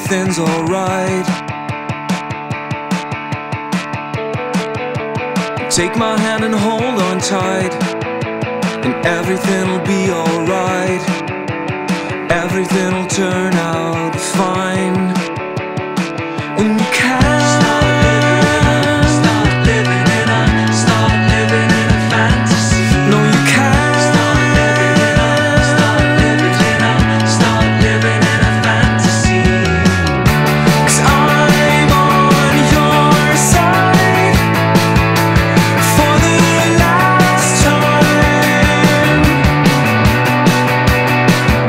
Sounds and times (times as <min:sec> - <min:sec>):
Music: 0:00.0 - 0:41.6.